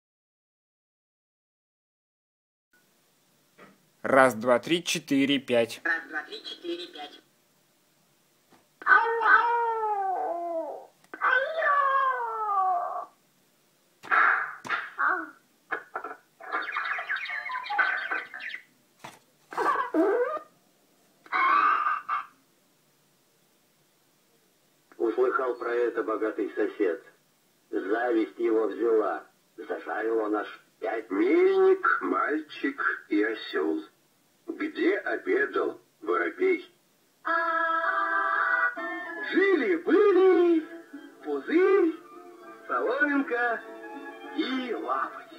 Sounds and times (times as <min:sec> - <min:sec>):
Speech: 0:04.0 - 0:07.2, 0:25.0 - 0:33.9.